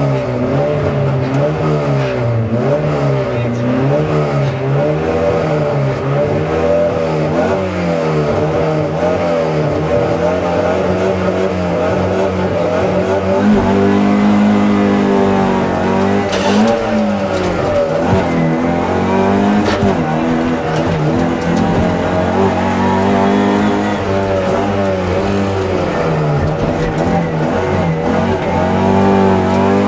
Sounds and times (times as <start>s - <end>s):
Car: 0.0s - 29.8s.